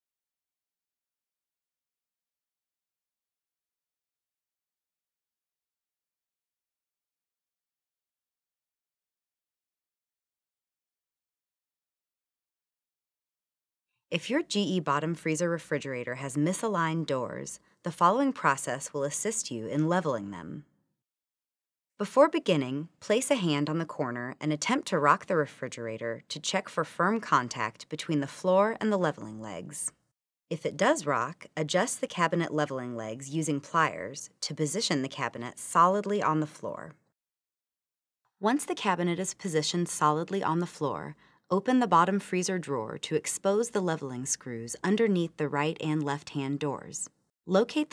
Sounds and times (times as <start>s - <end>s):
Speech: 14.1s - 20.7s, 22.0s - 37.0s, 38.4s - 47.9s.